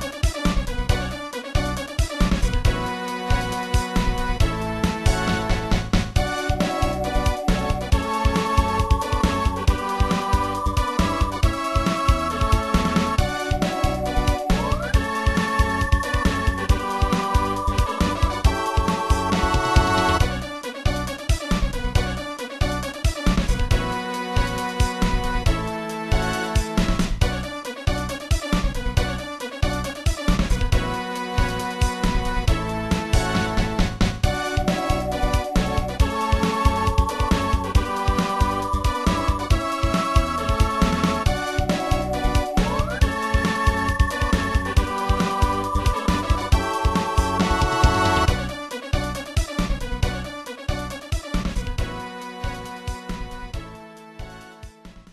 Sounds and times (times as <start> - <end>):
Music: 0.0 - 55.1.